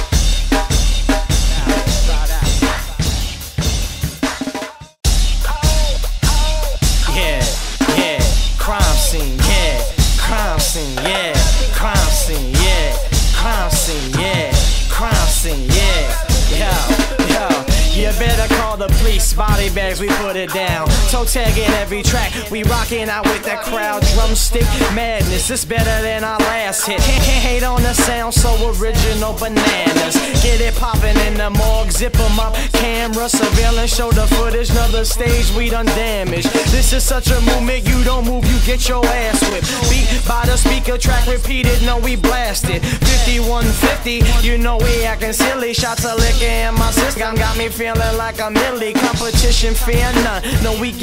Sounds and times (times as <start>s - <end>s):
Independent music: 0.0s - 51.0s.